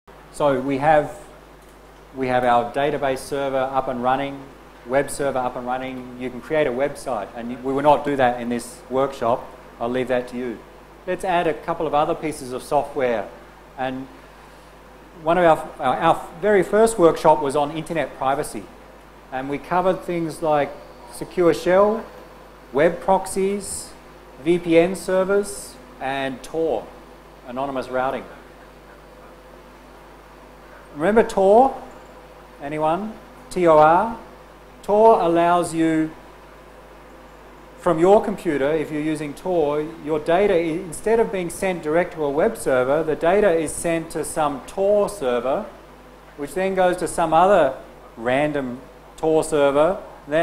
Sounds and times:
Speech: 0.3 - 1.4, 2.2 - 14.2, 15.2 - 22.1, 22.8 - 28.4, 31.0 - 31.9, 32.6 - 36.2, 37.8 - 45.8, 46.4 - 50.4.

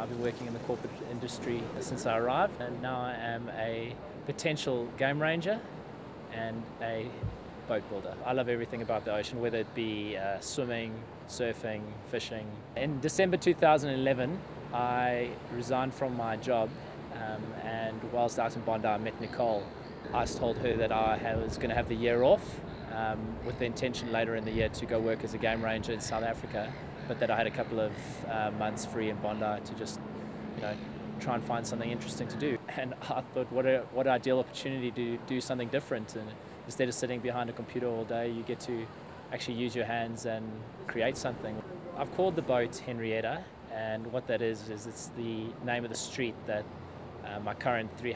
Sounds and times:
Speech: 0.0 - 5.7, 6.3 - 30.0, 30.6 - 48.1.

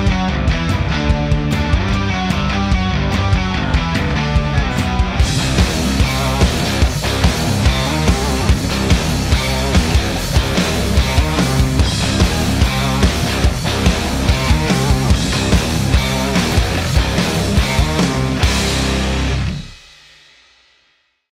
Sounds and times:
Chorus effect: 0.0 - 19.8
Music: 0.0 - 21.3.

